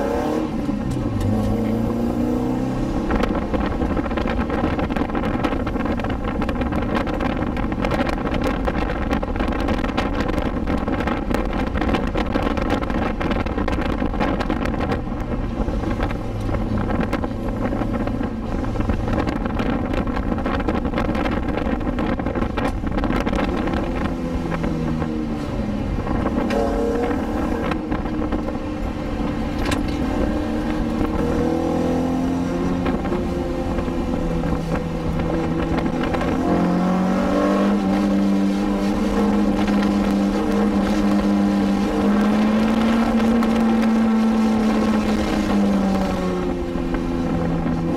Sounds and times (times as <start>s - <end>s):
Car: 0.0s - 47.9s.